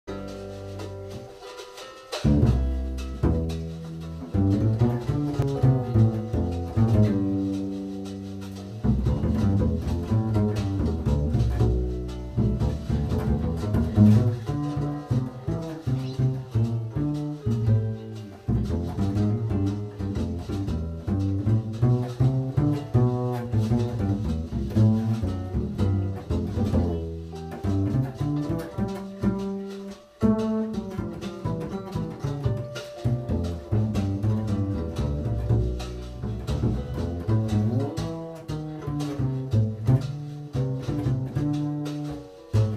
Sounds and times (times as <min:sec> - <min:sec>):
Double bass: 0:00.0 - 0:42.7
Plucked string instrument: 0:00.0 - 0:42.7.